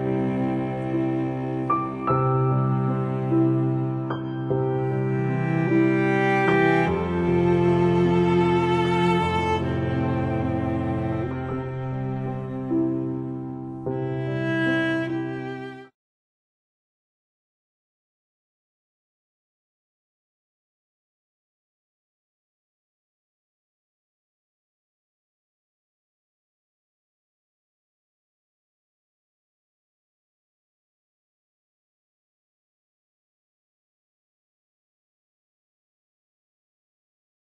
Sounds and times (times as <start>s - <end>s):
Music: 0.0s - 16.0s.